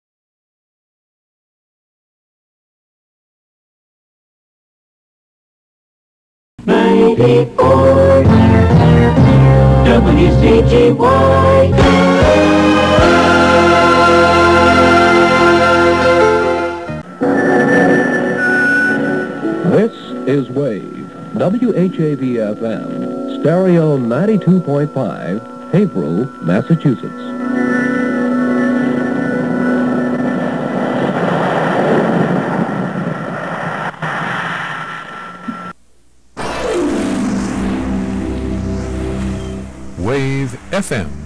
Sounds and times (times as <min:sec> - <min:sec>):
Music: 0:06.6 - 0:31.0, 0:36.5 - 0:41.2
Speech: 0:19.7 - 0:27.3, 0:40.0 - 0:41.2.